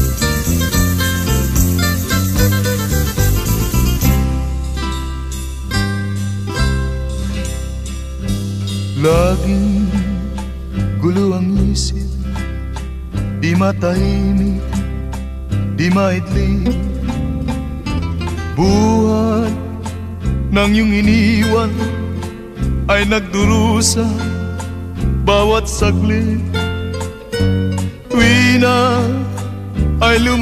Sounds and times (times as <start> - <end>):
Music: 0.0 - 30.4.